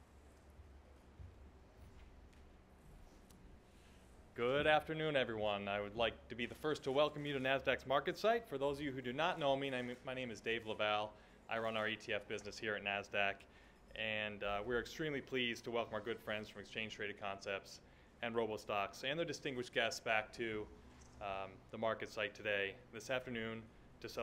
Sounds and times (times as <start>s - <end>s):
Speech: 4.4s - 24.2s.